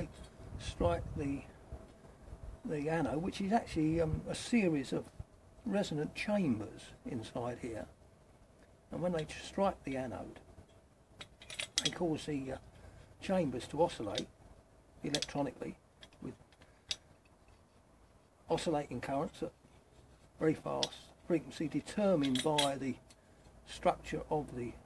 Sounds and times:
Speech: 0.0 - 1.6, 2.6 - 7.9, 8.9 - 10.4, 11.8 - 12.6, 13.2 - 14.3, 15.0 - 16.4, 18.5 - 19.6, 20.4 - 23.0, 23.7 - 24.8.

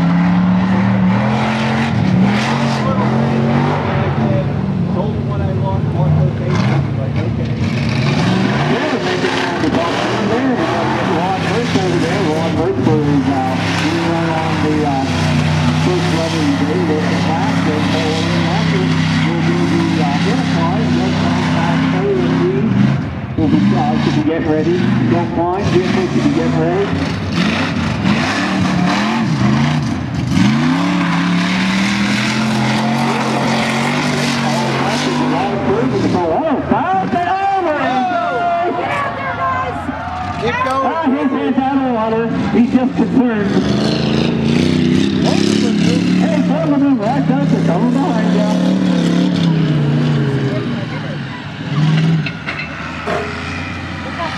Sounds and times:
Speech: 2.6 - 7.6, 8.7 - 22.8, 23.4 - 27.0, 34.4 - 43.8, 45.2 - 49.5, 50.2 - 51.9, 54.0 - 54.3.

